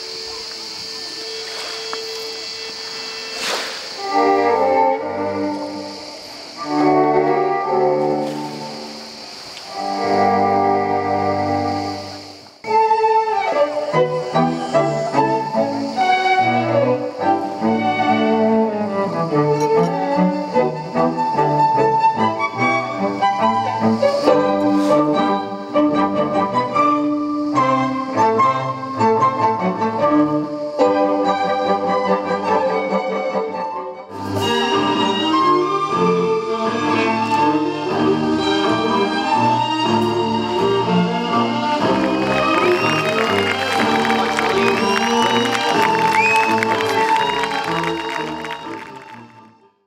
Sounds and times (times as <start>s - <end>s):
Classical music: 0.0s - 49.8s.